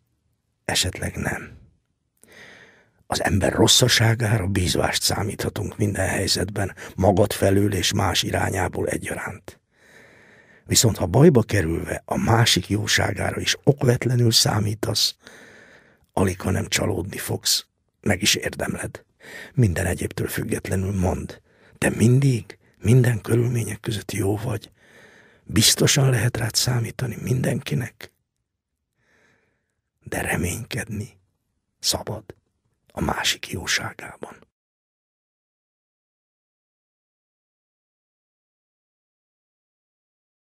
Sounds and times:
Speech: 0.7s - 1.6s, 3.1s - 9.6s, 10.7s - 15.2s, 16.2s - 24.7s, 25.5s - 28.1s, 30.0s - 31.2s, 31.8s - 34.5s.

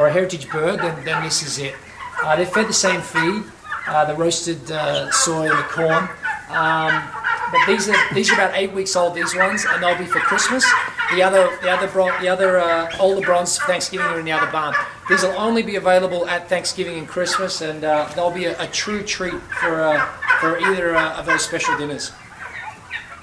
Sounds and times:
Gobble: 0.0s - 23.2s.

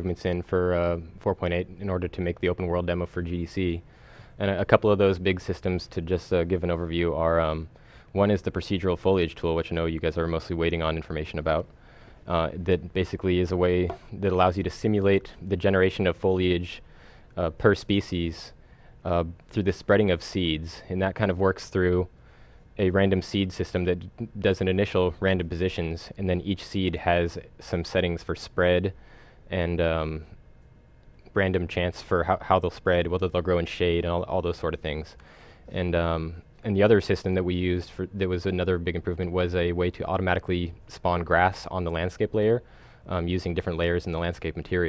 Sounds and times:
Speech: 0.0s - 3.8s, 4.4s - 22.1s, 22.8s - 30.4s, 31.2s - 44.8s.

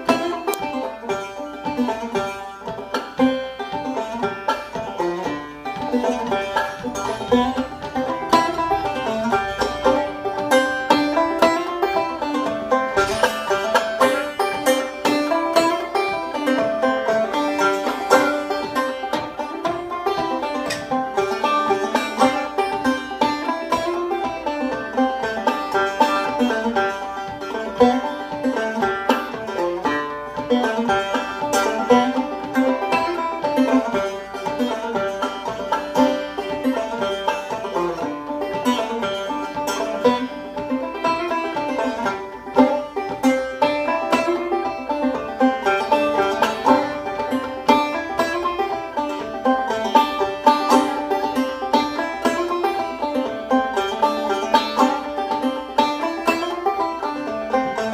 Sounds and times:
Banjo: 0.0s - 57.9s.

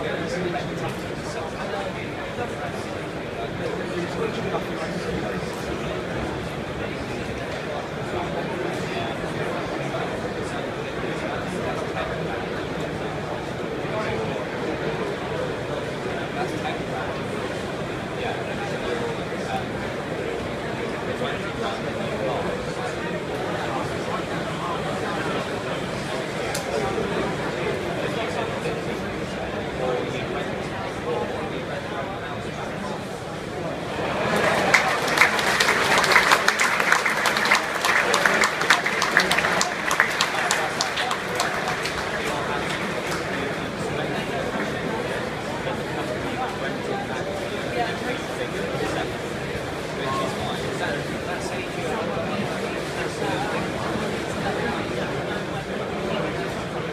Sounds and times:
Speech: 0.0s - 56.9s.

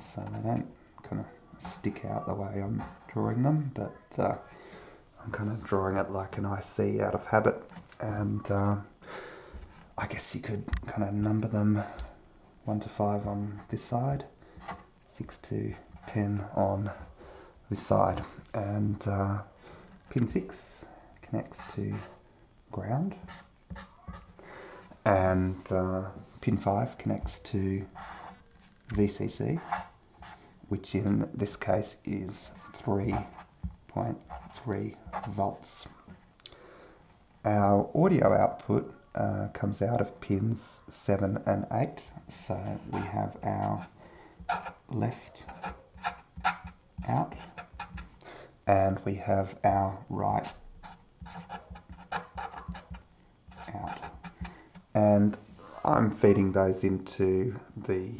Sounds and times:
Speech: 0.0s - 4.5s, 5.2s - 8.9s, 10.0s - 14.3s, 15.1s - 17.1s, 17.7s - 19.5s, 20.1s - 23.3s, 25.0s - 27.9s, 28.9s - 29.8s, 30.7s - 33.3s, 33.9s - 36.0s, 37.4s - 43.9s, 44.9s - 45.7s, 47.0s - 47.5s, 48.7s - 50.6s, 53.6s - 54.2s, 55.0s - 58.1s.

